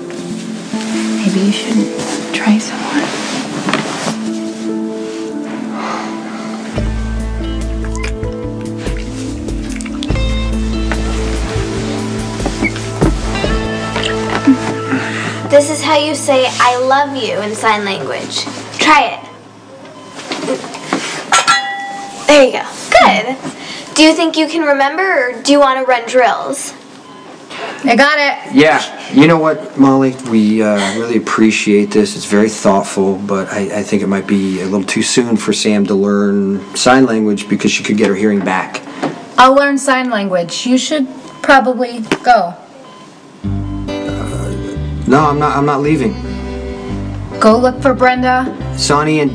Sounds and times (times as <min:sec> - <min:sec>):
Music: 0:00.0 - 0:20.2, 0:43.4 - 0:49.3.